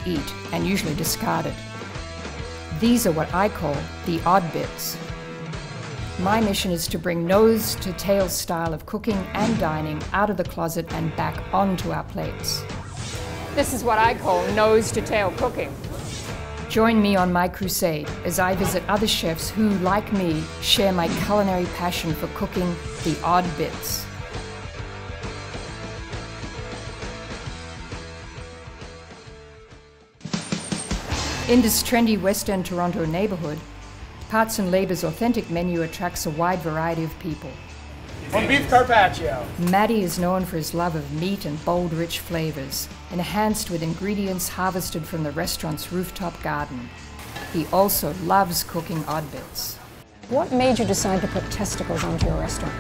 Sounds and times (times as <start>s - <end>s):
Speech: 0.0s - 1.6s, 2.8s - 5.0s, 13.6s - 15.7s, 38.4s - 46.9s, 47.6s - 52.8s.